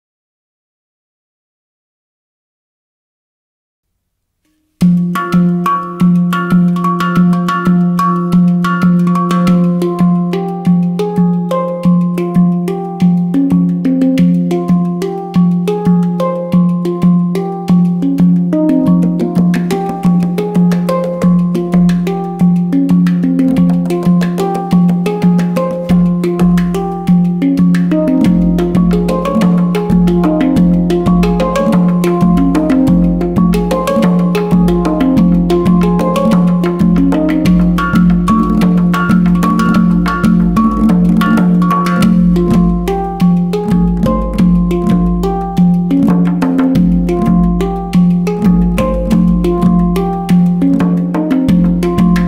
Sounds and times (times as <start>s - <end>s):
Percussion: 4.5s - 52.2s.